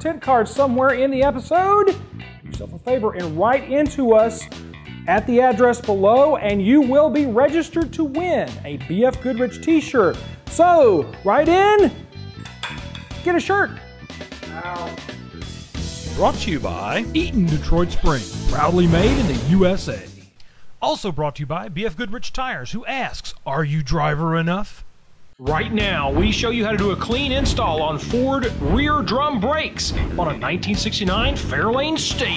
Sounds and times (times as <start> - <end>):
Speech: 0.0 - 4.5, 5.1 - 12.0, 13.2 - 13.8, 16.1 - 20.2, 20.8 - 24.8, 25.4 - 32.3
Drum kit: 11.8 - 20.3, 25.5 - 32.3
Drum: 17.8 - 20.1.